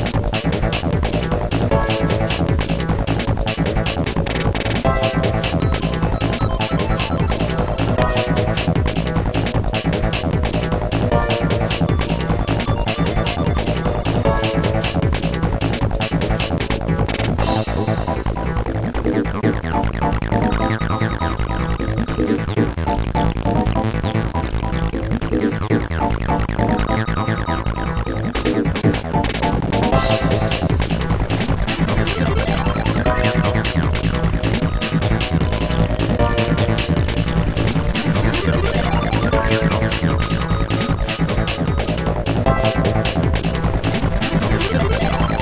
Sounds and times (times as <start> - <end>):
Techno: 0.0 - 45.4.